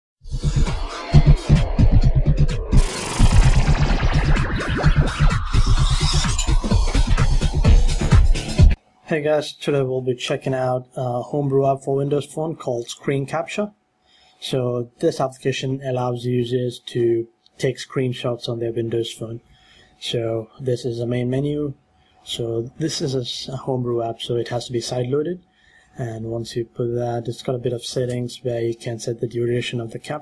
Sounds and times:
Music: 0:00.2 - 0:09.1
Speech: 0:09.1 - 0:13.8, 0:14.4 - 0:19.4, 0:20.0 - 0:25.4, 0:26.0 - 0:30.2.

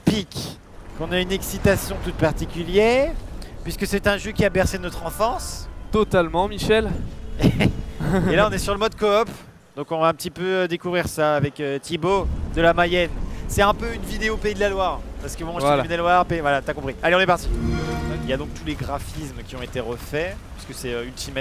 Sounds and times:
Speech: 0:00.0 - 0:21.4.

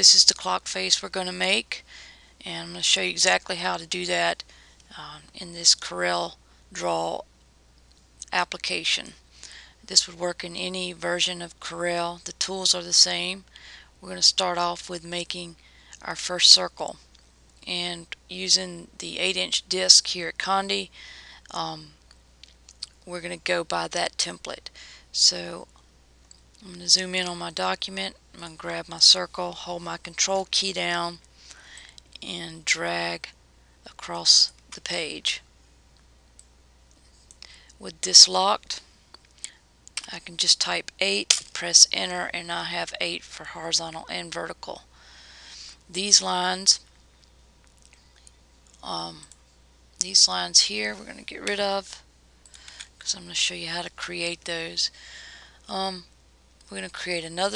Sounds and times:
Speech: 0:00.0 - 0:01.8, 0:02.4 - 0:07.2, 0:08.2 - 0:09.2, 0:09.9 - 0:17.0, 0:17.6 - 0:20.9, 0:21.5 - 0:22.0, 0:22.8 - 0:25.7, 0:26.6 - 0:31.2, 0:32.2 - 0:33.3, 0:33.9 - 0:35.4, 0:37.8 - 0:38.8, 0:40.0 - 0:44.8, 0:45.9 - 0:46.8, 0:48.8 - 0:49.2, 0:50.0 - 0:52.0, 0:53.0 - 0:54.9, 0:55.7 - 0:56.1, 0:56.7 - 0:57.5.

